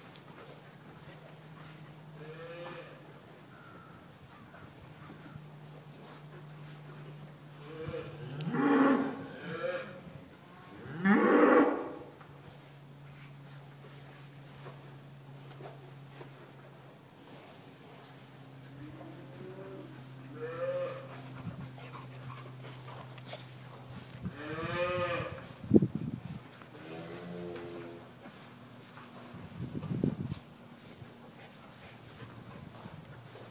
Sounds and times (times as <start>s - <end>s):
Livestock, farm animals, working animals: 0.0s - 33.5s.